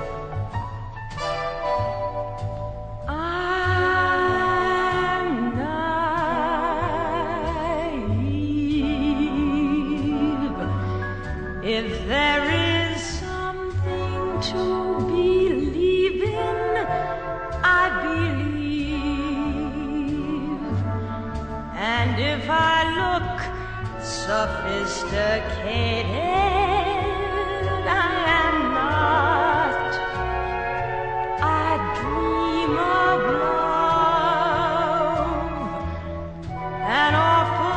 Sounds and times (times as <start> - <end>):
Music: 0.0 - 37.7.